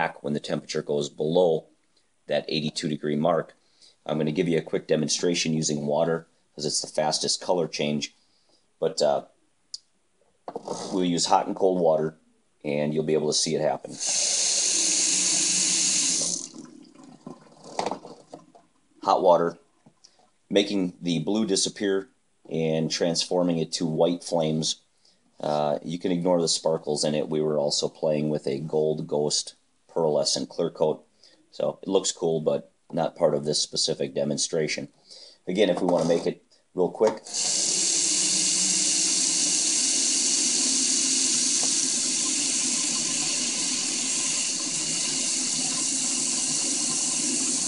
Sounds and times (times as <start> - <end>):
Speech: 0.0 - 1.7, 2.3 - 8.2, 8.8 - 9.3, 10.8 - 14.0, 19.0 - 19.6, 20.5 - 24.8, 25.4 - 37.3.